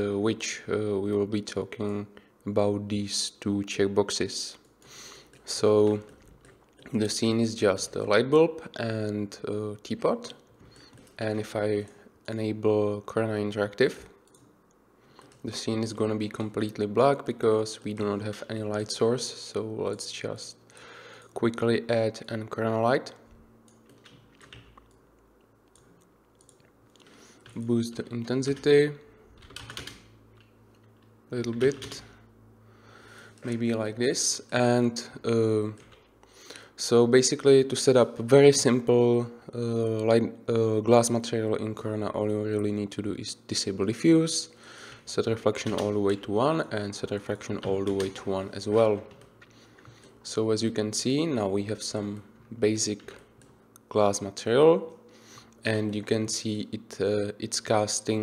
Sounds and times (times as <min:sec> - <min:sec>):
Speech: 0:00.0 - 0:04.6, 0:05.5 - 0:06.1, 0:06.9 - 0:10.4, 0:11.2 - 0:14.2, 0:15.4 - 0:20.6, 0:21.4 - 0:23.3, 0:27.6 - 0:29.1, 0:31.3 - 0:32.2, 0:33.4 - 0:35.9, 0:36.8 - 0:49.1, 0:50.2 - 0:53.2, 0:53.9 - 0:55.0, 0:55.6 - 0:58.2.